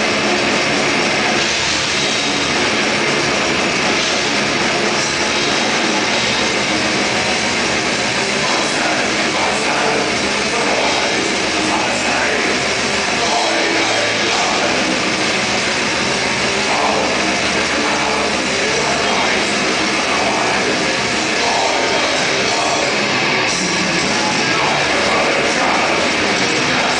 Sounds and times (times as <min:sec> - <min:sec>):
Music: 0:00.0 - 0:26.9.